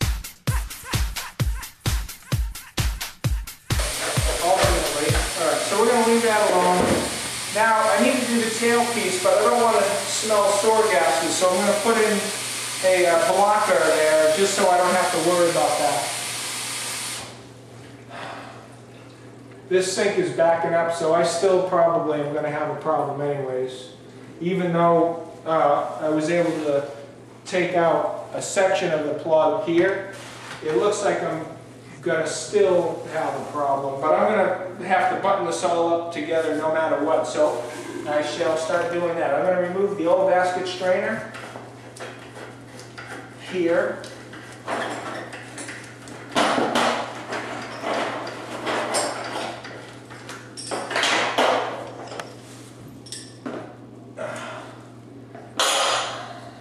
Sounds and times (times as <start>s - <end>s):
Sink (filling or washing): 3.7s - 17.4s
Water tap, faucet: 3.8s - 17.4s
Speech: 4.2s - 16.2s, 19.7s - 41.3s, 43.4s - 44.0s.